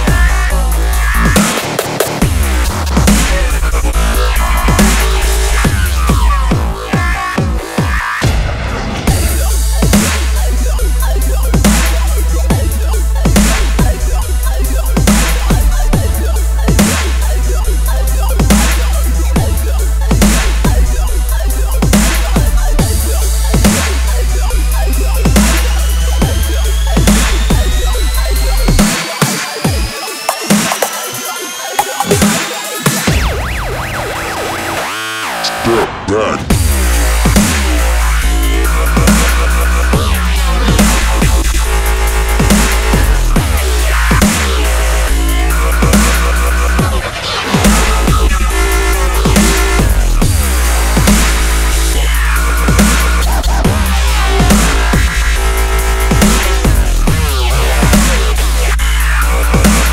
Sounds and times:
Dubstep: 0:00.0 - 0:59.9.

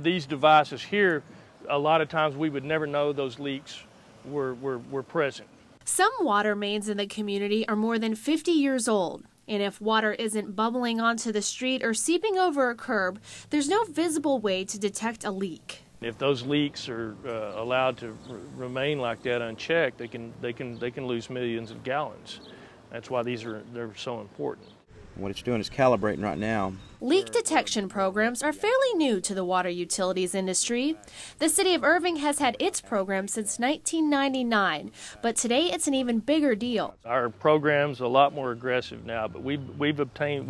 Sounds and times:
Speech: 0:00.0 - 0:24.6, 0:25.2 - 0:40.4.

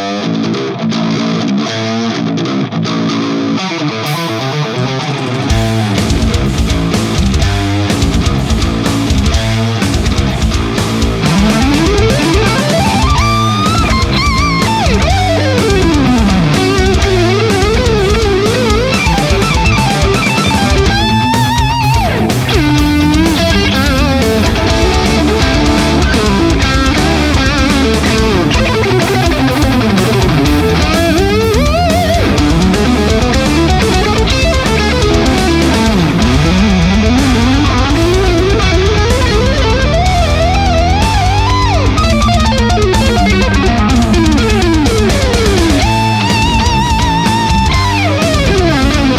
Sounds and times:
Bass guitar: 0:00.0 - 0:49.1.

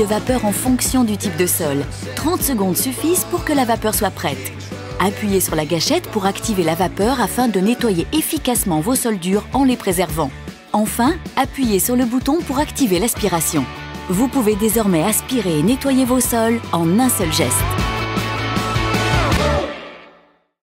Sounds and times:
Speech: 0:00.0 - 0:17.8
Music: 0:00.0 - 0:20.6.

